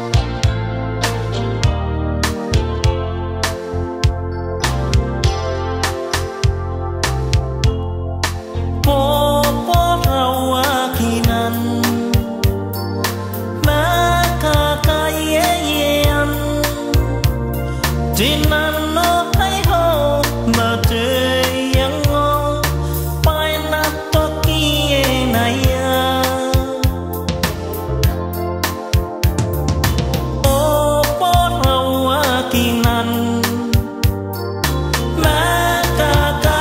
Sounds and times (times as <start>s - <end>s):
Music: 0.0s - 36.6s.